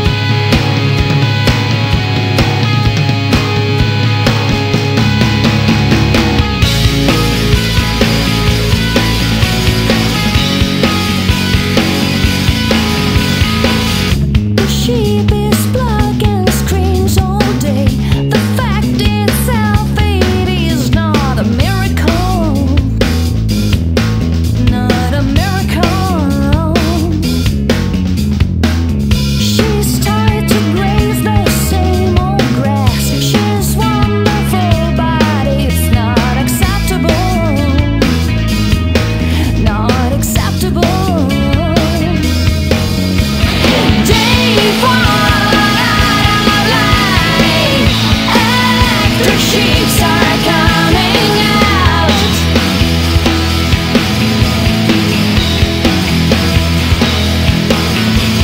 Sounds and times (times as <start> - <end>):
Funk: 0.0 - 58.4.